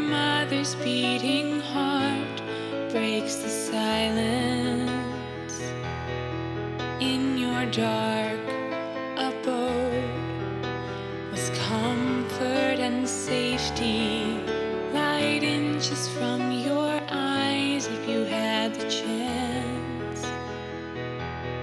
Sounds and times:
Music: 0.0 - 21.6.

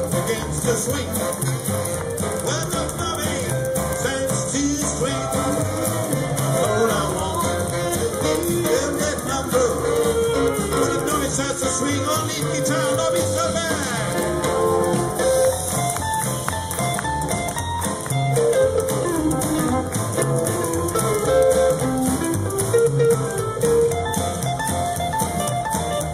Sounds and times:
Rock and roll: 0.0 - 26.1.

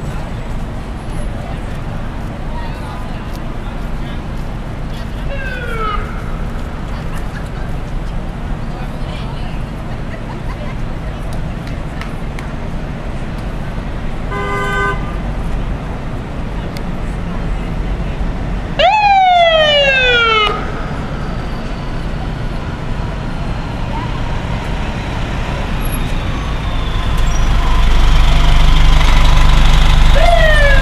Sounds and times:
Vehicle: 0.0 - 30.8.

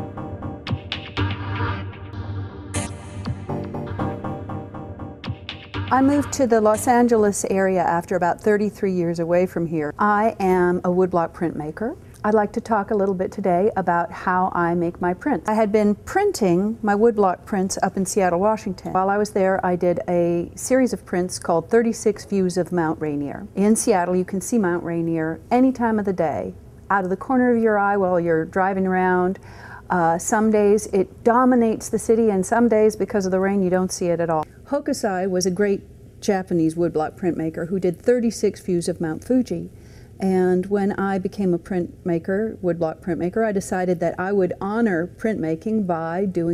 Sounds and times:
Speech: 5.9 - 46.5.

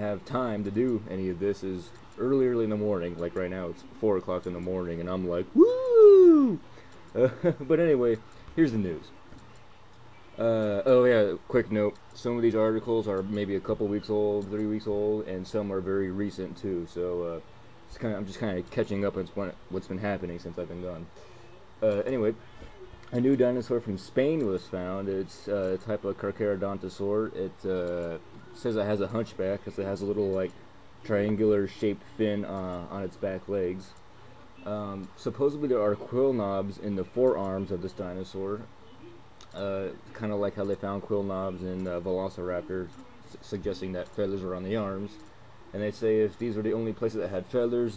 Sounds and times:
Speech: 0.0 - 6.6, 7.2 - 21.1, 21.8 - 22.4, 23.1 - 34.0, 34.6 - 47.9.

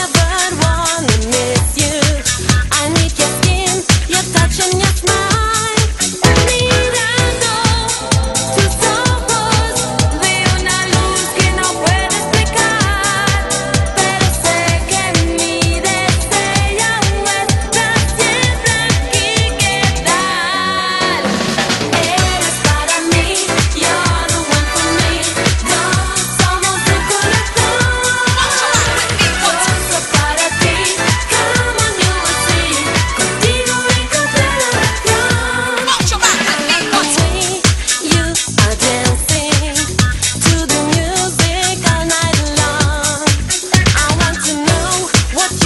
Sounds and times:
Music: 0.0 - 45.6.

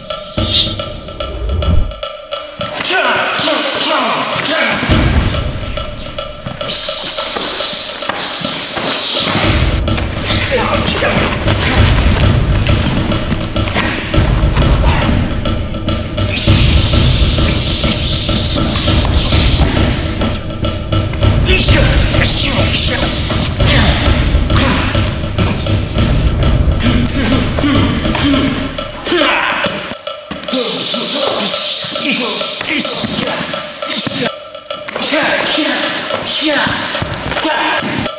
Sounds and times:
Music: 0.0 - 38.1.

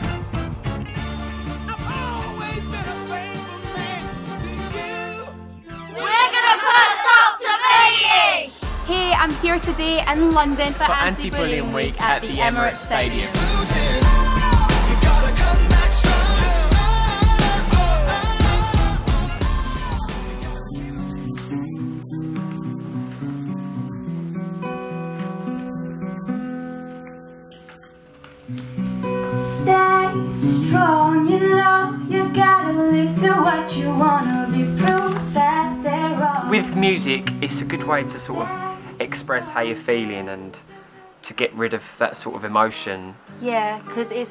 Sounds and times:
Exciting music: 0.0 - 21.8.

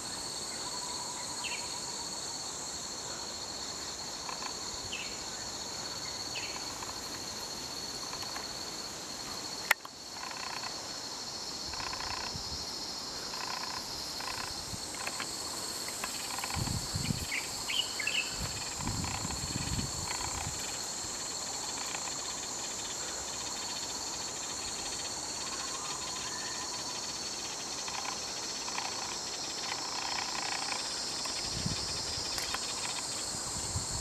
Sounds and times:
Outside, rural or natural: 0.0 - 34.0.

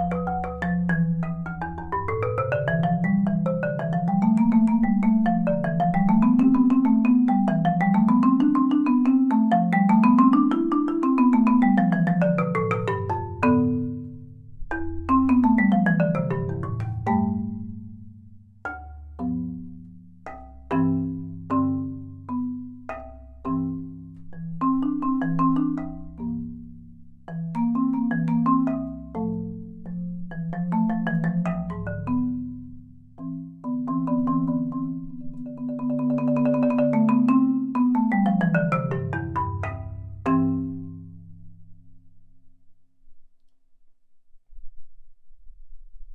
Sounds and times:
Marimba, xylophone: 0.0 - 41.6.

